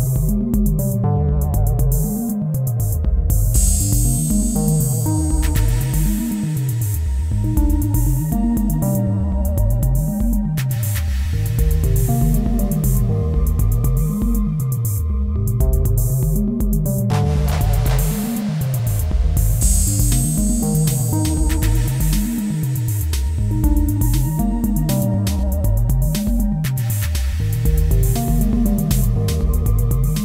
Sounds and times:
Synthesizer: 0:00.0 - 0:30.2.

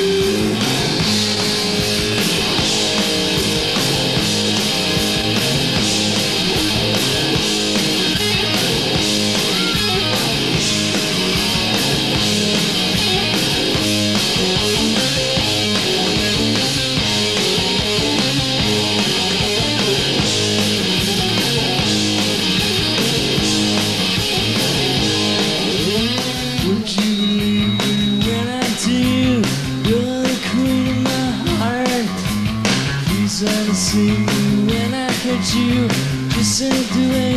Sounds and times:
Music: 0:00.0 - 0:37.3.

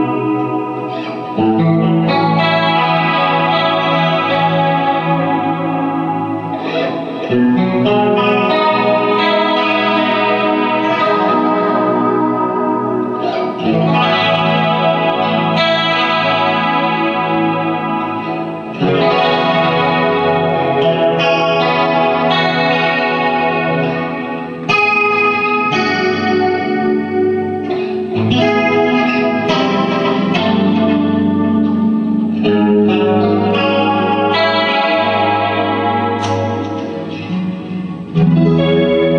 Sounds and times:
Music: 0:00.0 - 0:39.1.

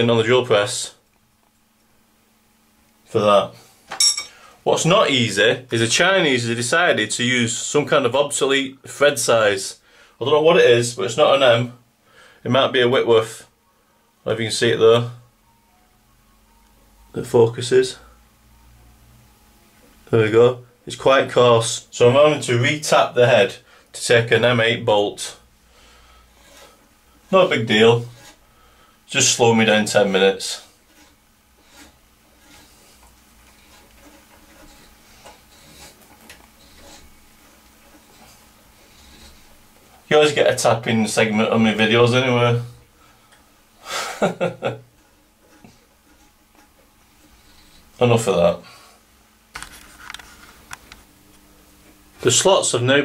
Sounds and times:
Speech: 0:00.0 - 0:01.0, 0:03.1 - 0:03.6, 0:04.6 - 0:11.8, 0:12.4 - 0:13.5, 0:14.2 - 0:15.2, 0:17.1 - 0:18.1, 0:20.0 - 0:25.4, 0:27.3 - 0:28.2, 0:29.1 - 0:30.7, 0:40.1 - 0:42.8, 0:48.0 - 0:48.8, 0:52.2 - 0:53.0.

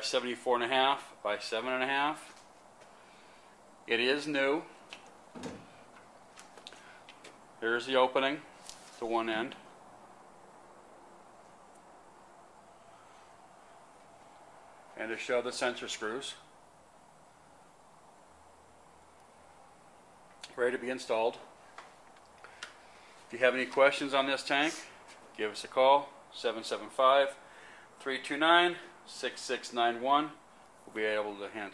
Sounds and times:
Speech: 0:00.0 - 0:02.4, 0:03.9 - 0:04.7, 0:07.6 - 0:09.7, 0:15.0 - 0:16.5, 0:20.4 - 0:21.5, 0:23.3 - 0:27.4, 0:28.0 - 0:31.7.

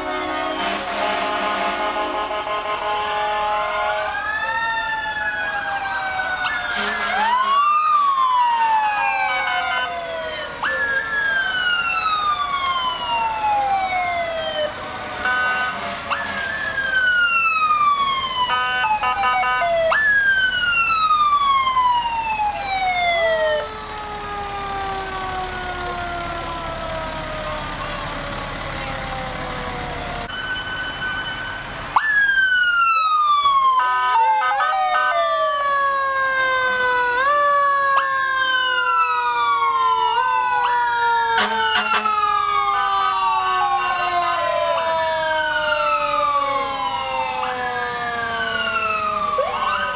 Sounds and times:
Fire engine, fire truck (siren): 0:00.0 - 0:49.9.

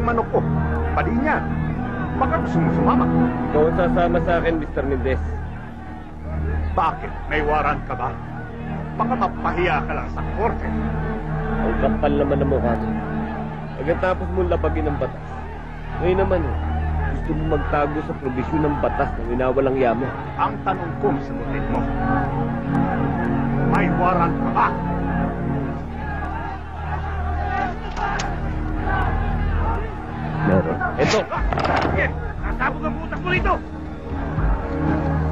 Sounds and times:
Music: 0:00.0 - 0:35.3
Speech: 0:16.0 - 0:21.9.

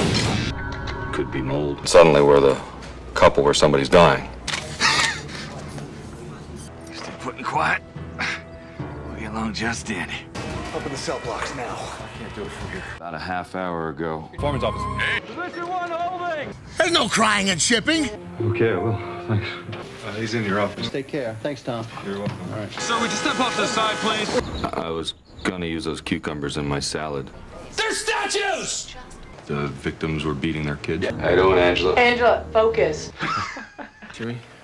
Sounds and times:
Music: 0:00.0 - 0:02.7, 0:06.6 - 0:13.0, 0:14.3 - 0:17.0, 0:17.9 - 0:20.9, 0:31.1 - 0:33.4.

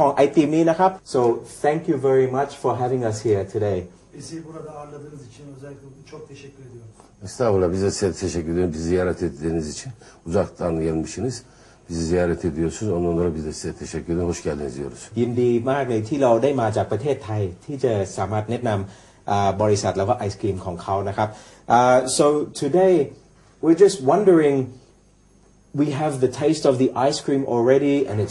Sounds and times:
Speech: 0:00.0 - 0:24.8, 0:25.8 - 0:28.3.

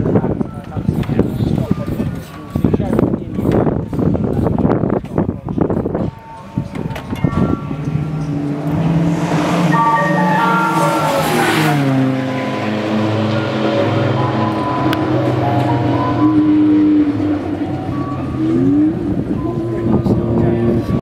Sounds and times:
Race car, auto racing: 0:00.0 - 0:21.0.

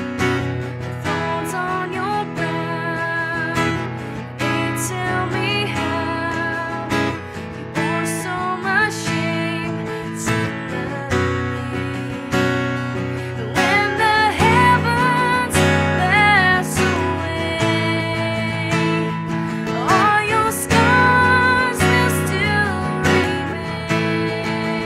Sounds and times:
Music: 0:00.0 - 0:24.8.

